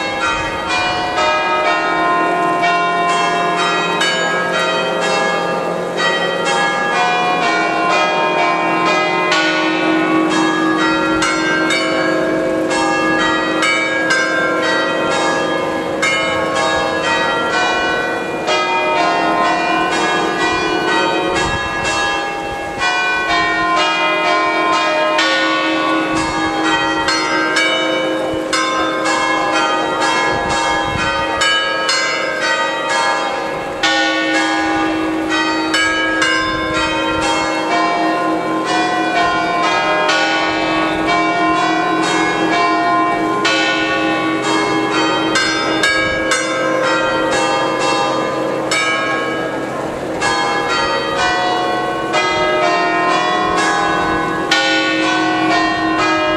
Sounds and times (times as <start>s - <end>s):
Bell: 0.0s - 56.3s.